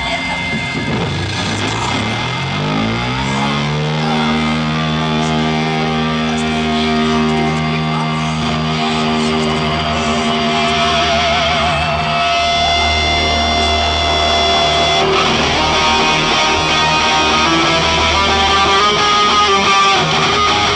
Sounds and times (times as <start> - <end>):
Electric guitar: 0.0 - 20.7.